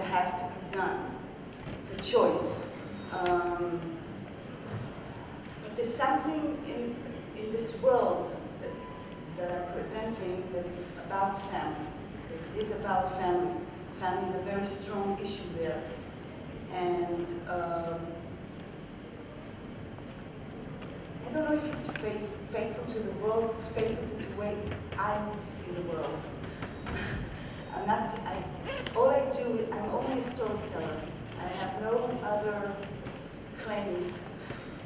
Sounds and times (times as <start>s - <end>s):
Speech: 0.0s - 1.2s, 1.8s - 4.1s, 5.6s - 8.8s, 9.4s - 16.0s, 16.7s - 18.2s, 21.2s - 26.4s, 27.7s - 32.9s, 33.6s - 34.3s.